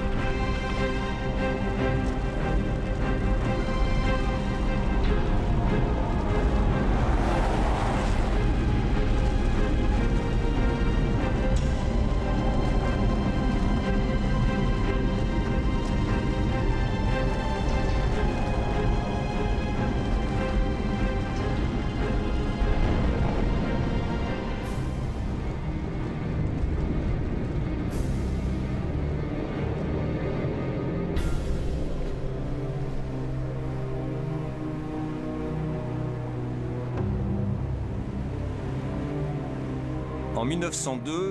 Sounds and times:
Music: 0:00.0 - 0:41.3.

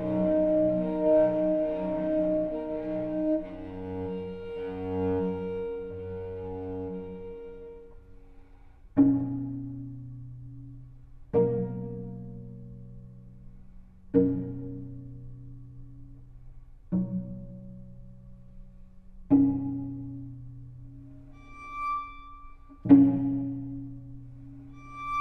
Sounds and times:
Cello: 0:00.0 - 0:25.2
Double bass: 0:00.0 - 0:25.2
Pizzicato: 0:00.0 - 0:25.2.

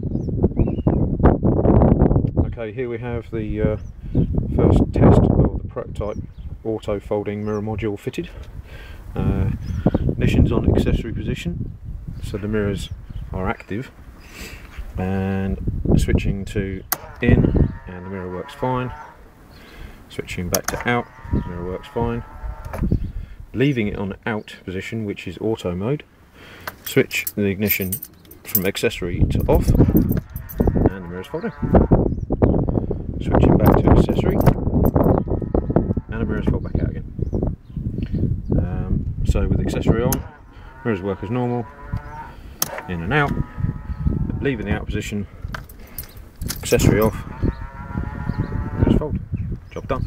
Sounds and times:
Speech: 0:02.4 - 0:03.8, 0:04.5 - 0:08.4, 0:09.2 - 0:09.6, 0:10.2 - 0:11.6, 0:12.2 - 0:14.0, 0:15.0 - 0:19.0, 0:20.1 - 0:22.3, 0:23.6 - 0:26.1, 0:26.9 - 0:29.8, 0:30.9 - 0:31.6, 0:33.2 - 0:34.6, 0:36.1 - 0:37.1, 0:38.6 - 0:41.7, 0:42.9 - 0:43.4, 0:44.4 - 0:45.3, 0:46.6 - 0:47.2, 0:48.8 - 0:50.0.

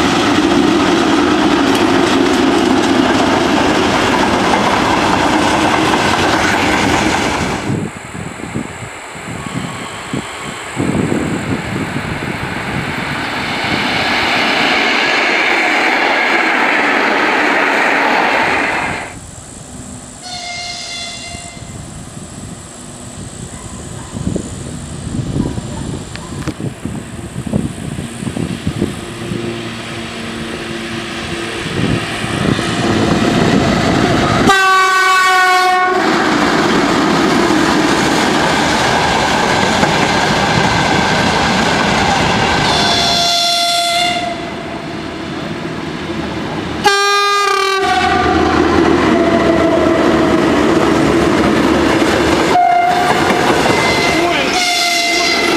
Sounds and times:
Clickety-clack: 0:00.0 - 0:07.6, 0:51.4 - 0:53.9
Railroad car, train wagon: 0:00.0 - 0:55.5
Train: 0:00.0 - 0:55.5.

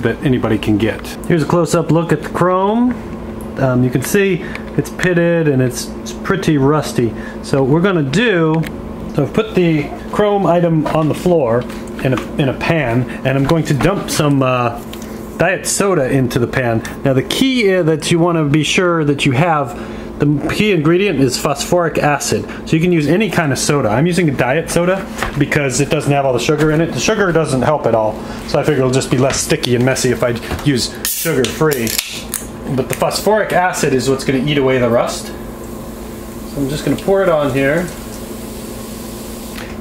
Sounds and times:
Speech: 0:00.0 - 0:03.0, 0:03.6 - 0:14.8, 0:15.4 - 0:35.4, 0:36.5 - 0:38.0.

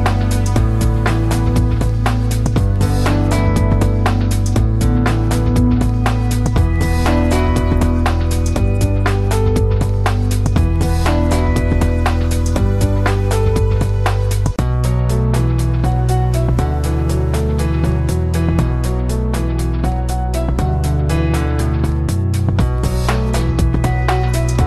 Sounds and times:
Music: 0:00.0 - 0:24.6.

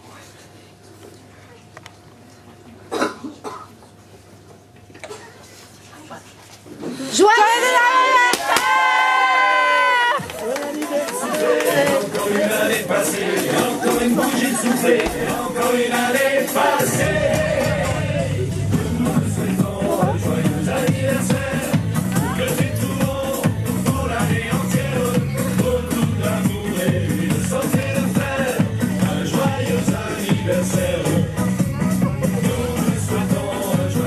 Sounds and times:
Music: 0:11.4 - 0:34.0.

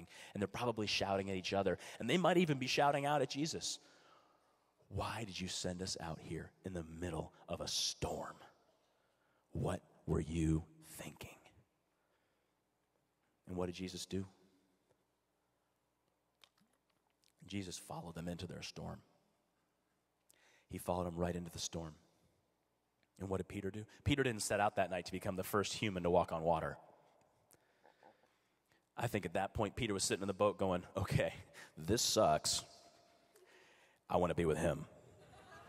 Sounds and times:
Speech: 0:00.0 - 0:03.8, 0:04.9 - 0:08.5, 0:09.6 - 0:11.5, 0:13.5 - 0:14.4, 0:17.4 - 0:19.1, 0:20.7 - 0:22.0, 0:23.2 - 0:26.8, 0:29.0 - 0:32.8, 0:34.1 - 0:35.0.

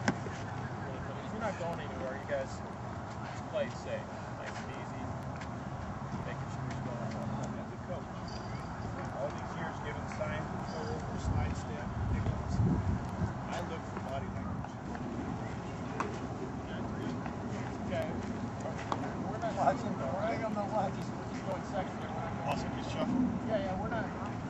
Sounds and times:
Speech: 0:00.8 - 0:05.2, 0:06.2 - 0:12.7, 0:13.5 - 0:14.8, 0:17.9 - 0:24.4.

